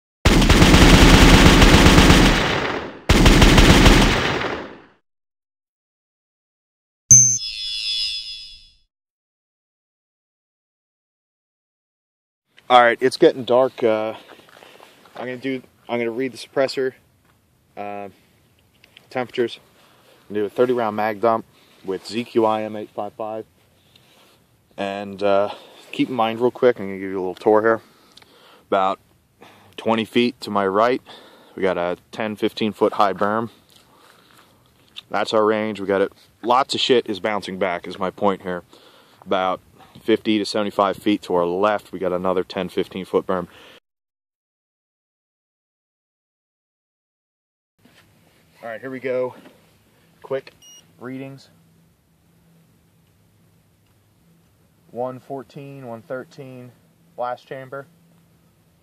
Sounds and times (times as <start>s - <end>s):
Machine gun: 0.3s - 4.9s.